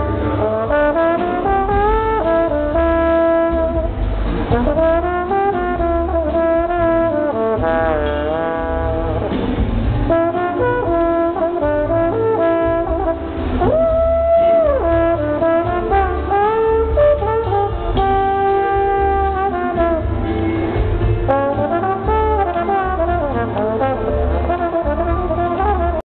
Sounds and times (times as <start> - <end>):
Classical music: 0.0 - 26.0
Inside, public space: 0.0 - 26.0
Trombone: 0.0 - 26.0.